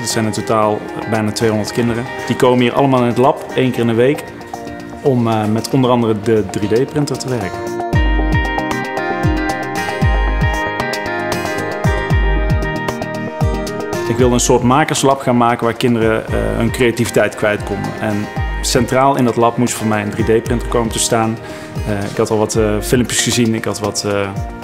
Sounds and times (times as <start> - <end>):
Speech: 0.0 - 4.2, 5.0 - 7.6, 14.1 - 24.4
Music: 0.0 - 24.6.